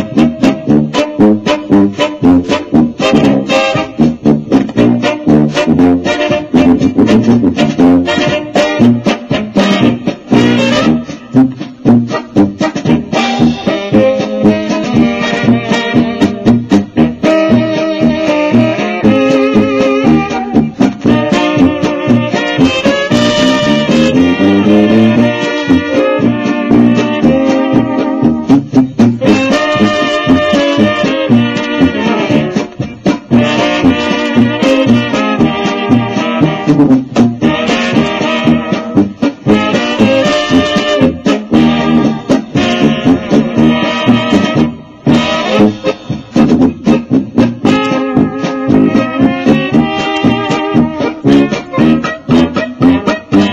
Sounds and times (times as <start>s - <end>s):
Music: 0.0s - 53.5s.